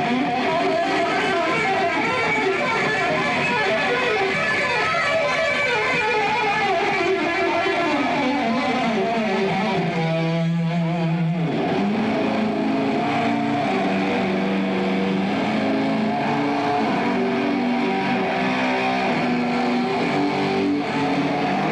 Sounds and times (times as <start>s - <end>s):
Electric guitar: 0.0s - 21.7s.